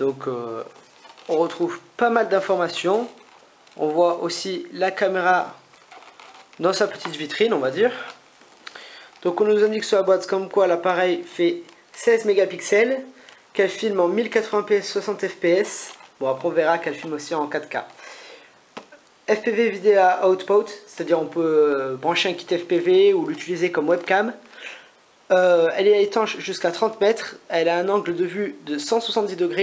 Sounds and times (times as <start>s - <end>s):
Speech: 0.0s - 3.2s, 3.8s - 5.6s, 6.6s - 8.2s, 9.2s - 18.0s, 19.3s - 24.5s, 25.3s - 29.6s.